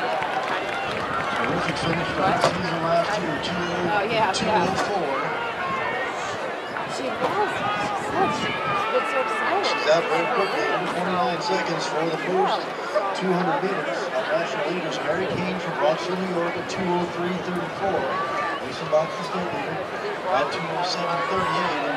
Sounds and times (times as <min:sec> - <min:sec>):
Outside, urban or manmade: 0:00.0 - 0:21.9
Speech: 0:01.4 - 0:05.4, 0:06.9 - 0:21.9.